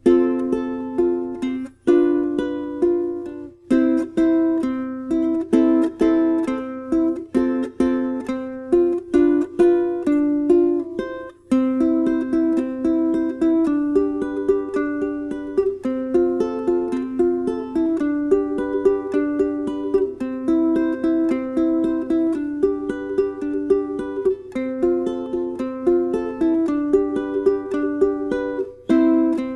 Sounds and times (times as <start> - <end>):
Inside, small room: 0.0 - 29.5
Ukulele: 0.0 - 29.5.